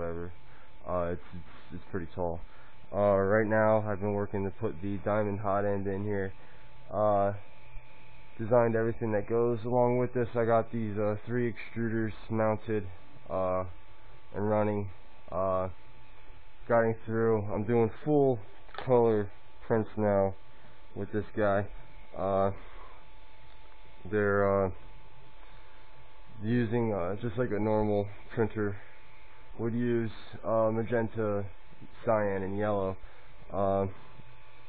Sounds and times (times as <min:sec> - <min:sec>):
Speech: 0:00.0 - 0:07.5, 0:08.4 - 0:15.8, 0:16.6 - 0:20.4, 0:21.0 - 0:22.7, 0:24.0 - 0:24.8, 0:26.4 - 0:28.8, 0:29.6 - 0:34.0.